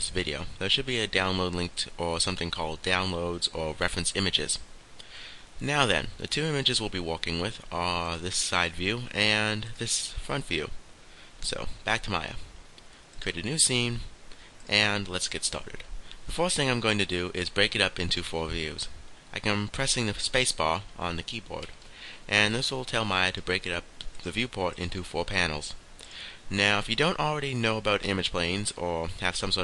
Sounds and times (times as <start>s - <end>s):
Speech: 0.0s - 4.7s, 5.6s - 10.8s, 11.4s - 12.5s, 13.2s - 14.1s, 14.7s - 21.7s, 22.3s - 25.8s, 26.5s - 29.6s.